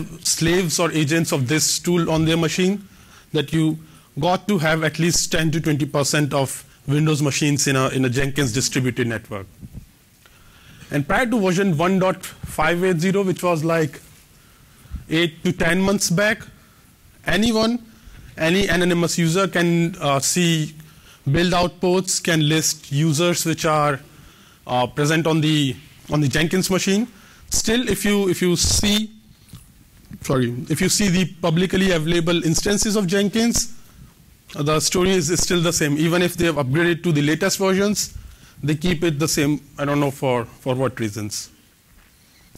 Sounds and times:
Narration, monologue: 0.0s - 42.5s.

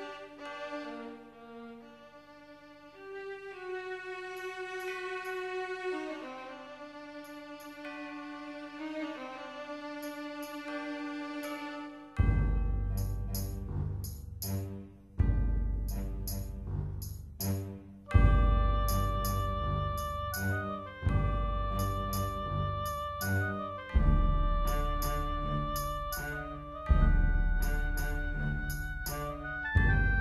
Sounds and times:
Theme music: 11.8s - 30.2s.

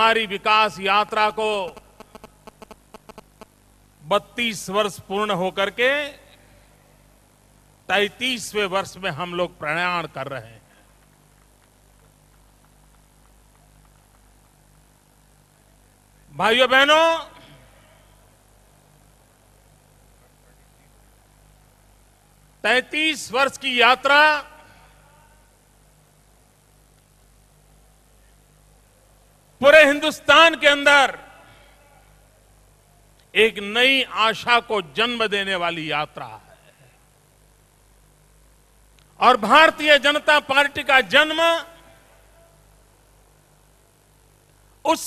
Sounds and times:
Male speech, man speaking: 0.0s - 1.8s, 4.1s - 6.3s, 7.9s - 10.6s, 16.4s - 17.7s, 22.7s - 24.6s, 29.6s - 32.1s, 33.4s - 36.8s, 39.2s - 41.9s
Narration, monologue: 0.0s - 13.6s, 15.5s - 45.0s.

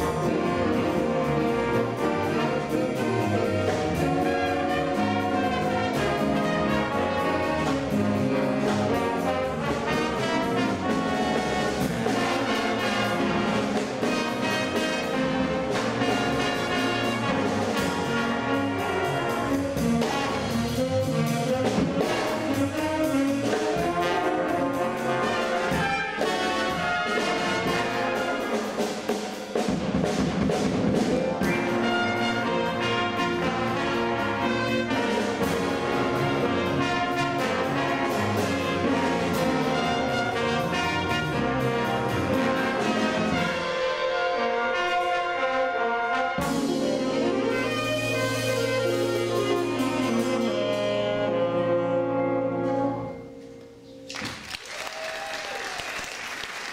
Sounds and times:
Inside, public space: 0.0s - 56.7s
Orchestra: 0.0s - 56.7s.

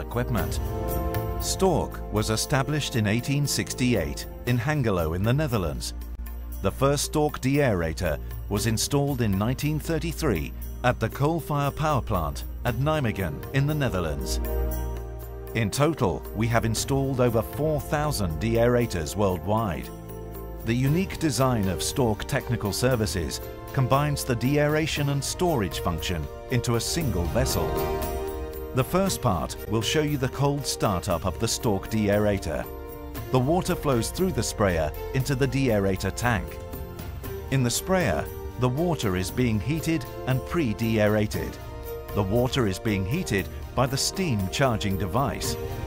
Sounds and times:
Speech: 0.0s - 0.6s, 1.4s - 5.9s, 6.6s - 14.4s, 15.6s - 19.9s, 20.6s - 27.9s, 28.8s - 32.7s, 33.3s - 36.6s, 37.5s - 45.6s
Music: 0.0s - 45.8s.

